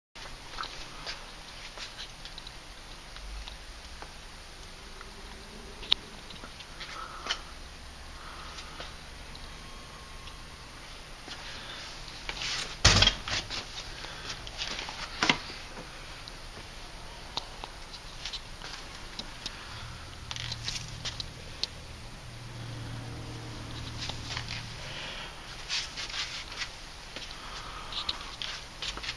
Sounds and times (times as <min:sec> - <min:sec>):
Silence: 0:00.4 - 0:29.1.